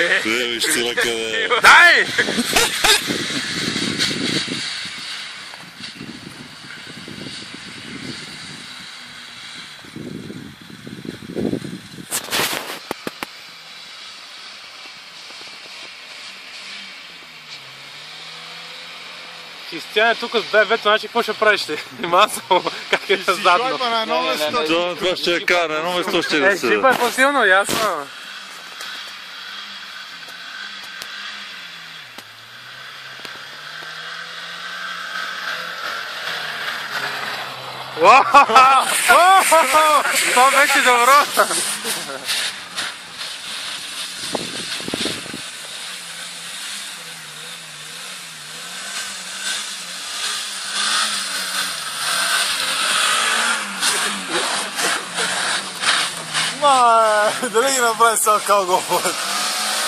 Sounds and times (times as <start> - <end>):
Speech: 0.0 - 2.2, 19.7 - 28.1, 38.0 - 42.2, 56.6 - 59.2
Car: 0.0 - 59.8
Outside, rural or natural: 0.0 - 59.8.